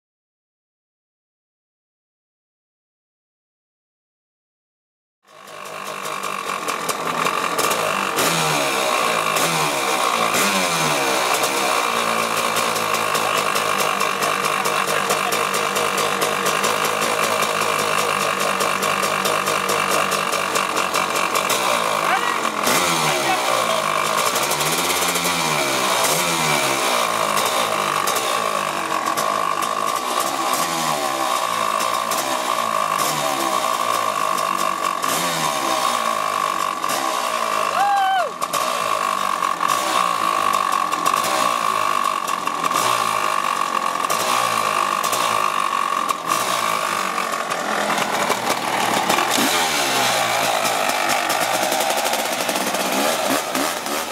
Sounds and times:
Vehicle: 5.2s - 54.1s.

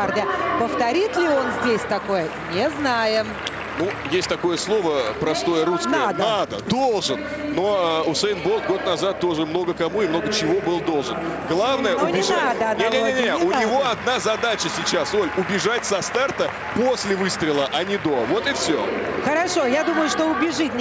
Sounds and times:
Music: 0.0s - 8.3s
Outside, urban or manmade: 0.0s - 20.8s.

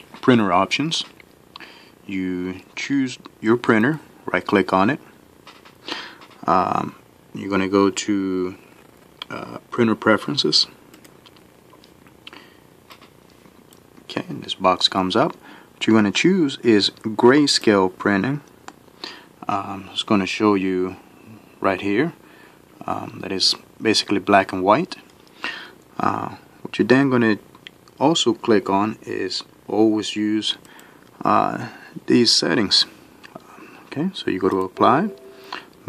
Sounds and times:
Speech: 0.2s - 1.2s, 2.1s - 5.1s, 6.4s - 8.6s, 9.2s - 10.8s, 14.1s - 18.5s, 19.4s - 21.0s, 21.6s - 22.2s, 22.8s - 25.1s, 26.0s - 27.4s, 28.0s - 30.6s, 31.2s - 33.0s, 33.9s - 35.2s.

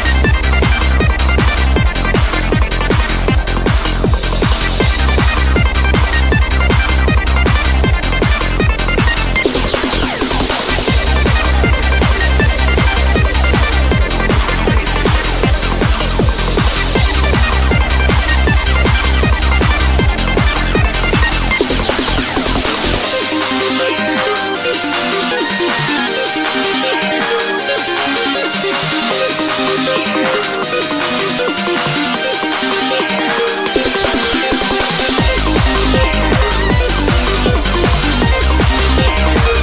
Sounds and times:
Music: 0.0s - 39.6s.

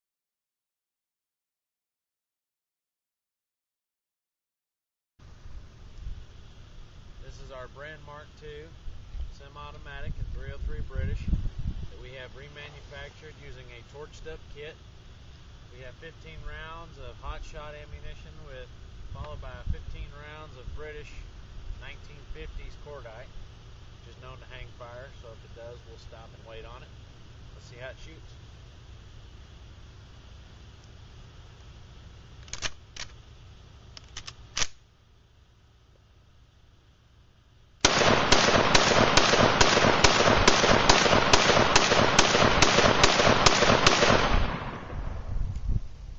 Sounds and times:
Speech: 7.2s - 14.8s, 15.7s - 23.4s, 24.0s - 26.9s, 27.6s - 28.4s.

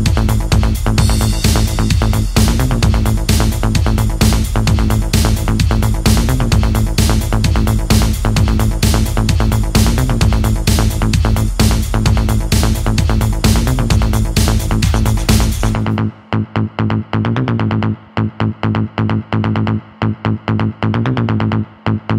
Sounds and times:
Music: 0.0s - 22.1s.

